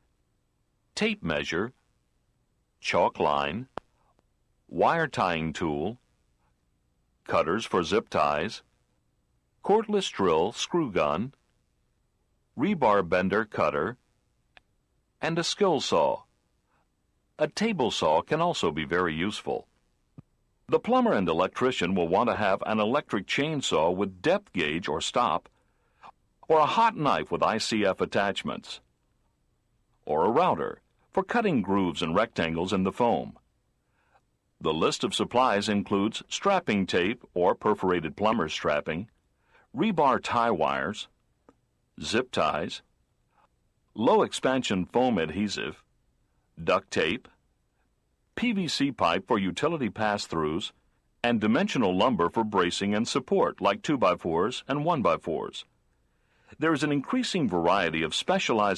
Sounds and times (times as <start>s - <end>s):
Speech: 1.0s - 1.8s, 2.8s - 3.8s, 4.7s - 6.0s, 7.3s - 8.7s, 9.6s - 11.4s, 12.6s - 14.0s, 15.2s - 16.3s, 17.4s - 19.7s, 20.7s - 25.5s, 26.4s - 28.9s, 30.0s - 33.4s, 34.6s - 39.1s, 39.7s - 41.1s, 42.0s - 42.9s, 43.9s - 45.9s, 46.6s - 47.4s, 48.4s - 55.7s, 56.5s - 58.7s.